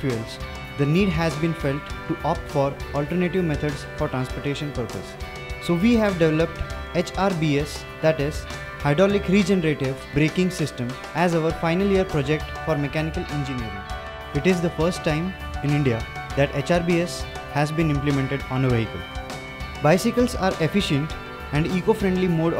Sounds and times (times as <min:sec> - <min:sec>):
Speech: 0:00.0 - 0:05.1, 0:05.7 - 0:13.8, 0:14.4 - 0:19.0, 0:19.8 - 0:22.5
Music: 0:00.0 - 0:22.5.